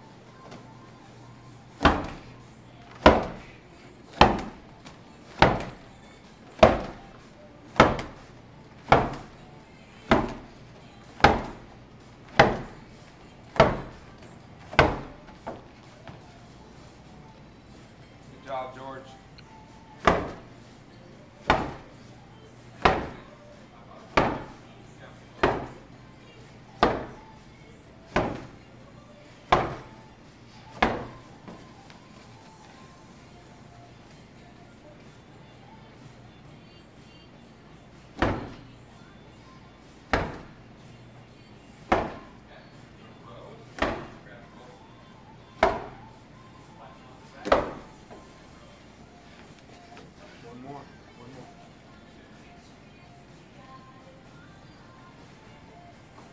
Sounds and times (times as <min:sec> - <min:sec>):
Music: 0:00.0 - 0:56.3.